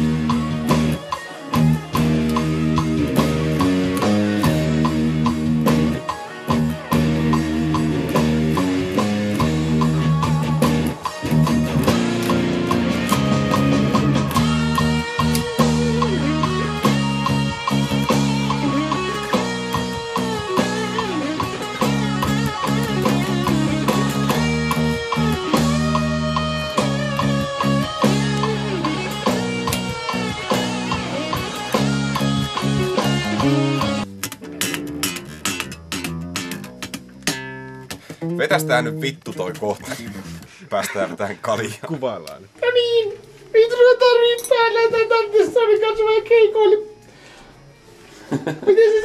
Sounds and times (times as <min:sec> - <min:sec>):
Bass guitar: 0:00.0 - 0:40.6
Speech: 0:38.2 - 0:46.9.